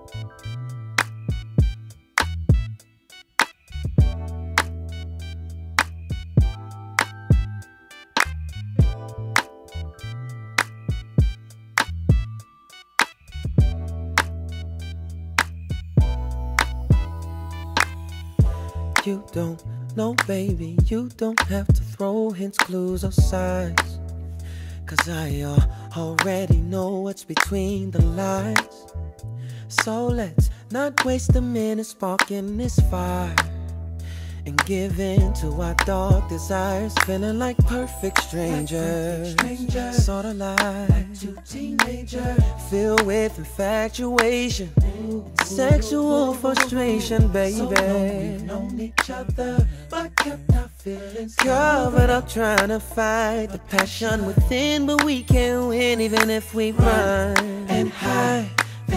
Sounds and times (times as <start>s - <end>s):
Music: 0.0s - 58.9s.